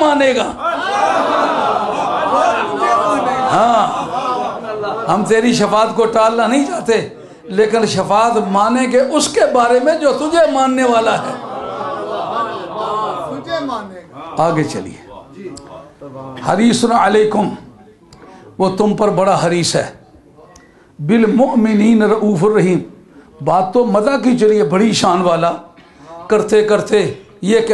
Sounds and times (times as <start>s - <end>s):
Narration, monologue: 0.0s - 0.8s, 1.4s - 11.8s, 12.5s - 27.7s
Male speech, man speaking: 0.0s - 1.1s, 2.2s - 11.6s, 12.4s - 27.7s.